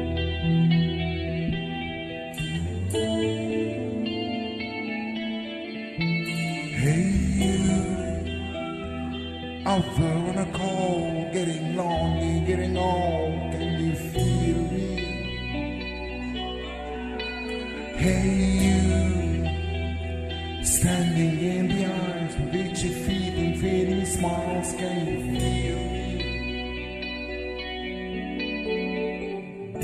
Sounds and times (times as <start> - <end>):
Music: 0.0 - 29.8
Singing: 6.3 - 9.0, 9.6 - 19.9.